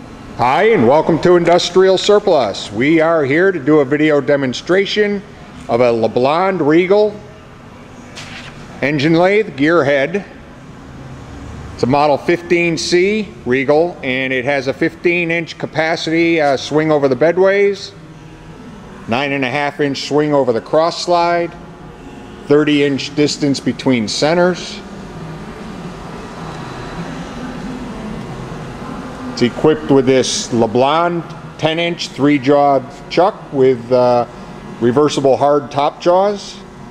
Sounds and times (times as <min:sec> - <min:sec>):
Speech: 0:00.4 - 0:07.3, 0:08.8 - 0:10.4, 0:11.8 - 0:18.0, 0:19.1 - 0:21.6, 0:22.4 - 0:24.9, 0:29.4 - 0:36.7.